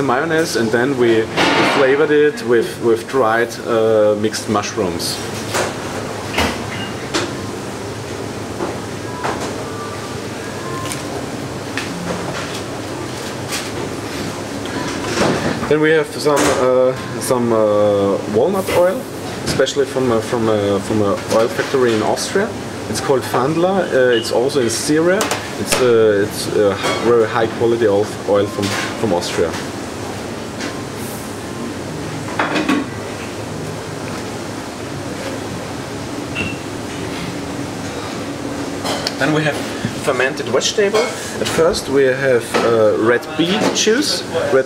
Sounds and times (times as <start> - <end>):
Speech: 0.0 - 5.3, 15.6 - 29.6, 39.2 - 44.6.